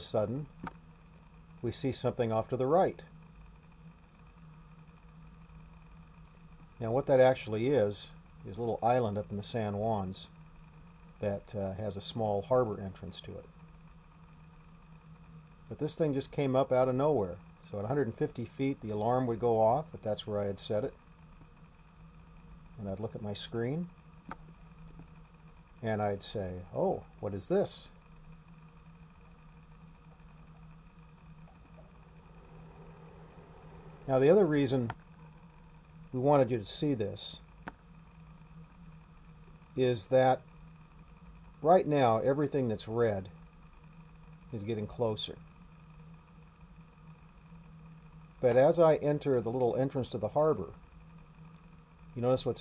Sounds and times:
Speech: 0.0s - 0.5s, 1.6s - 3.1s, 6.8s - 10.3s, 11.2s - 13.5s, 15.7s - 21.0s, 22.8s - 23.9s, 25.8s - 27.9s, 34.1s - 35.0s, 36.2s - 37.4s, 39.8s - 40.4s, 41.6s - 43.3s, 44.5s - 45.4s, 48.4s - 50.8s, 52.2s - 52.6s.

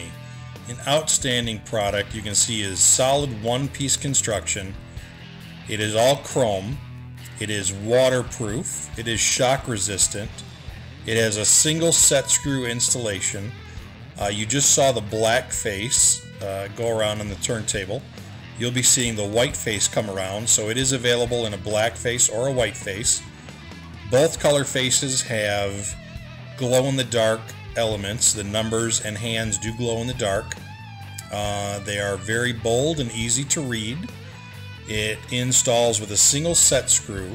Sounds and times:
Speech: 0.0s - 4.8s, 5.7s - 10.4s, 11.0s - 13.5s, 14.2s - 18.0s, 18.6s - 23.3s, 24.1s - 26.0s, 26.6s - 30.6s, 31.2s - 34.2s, 34.8s - 37.3s
Music: 0.0s - 37.3s.

